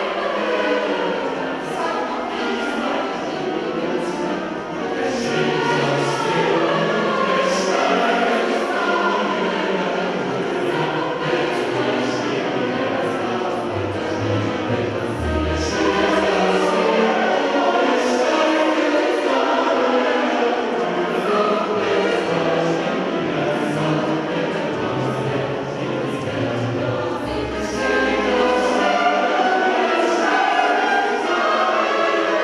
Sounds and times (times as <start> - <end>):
Music: 0.0 - 32.4.